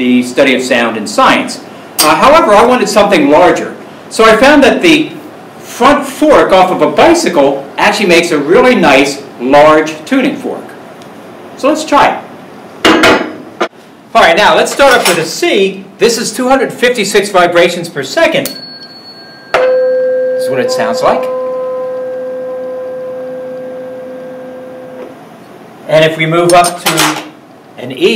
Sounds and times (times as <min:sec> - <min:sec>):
Speech: 0:00.0 - 0:10.8, 0:11.6 - 0:12.3, 0:14.1 - 0:18.5, 0:20.4 - 0:21.3, 0:25.9 - 0:28.1.